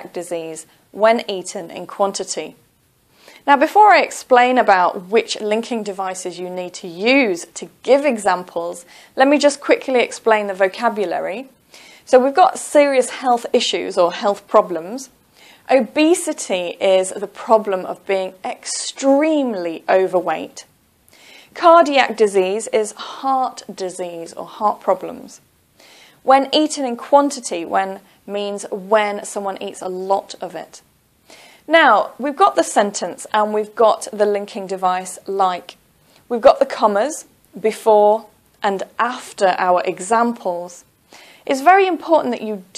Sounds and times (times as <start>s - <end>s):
Speech: 0.0s - 2.6s, 3.4s - 11.5s, 12.1s - 15.1s, 15.7s - 20.7s, 21.6s - 25.4s, 26.2s - 30.8s, 31.7s - 40.9s, 41.5s - 42.7s.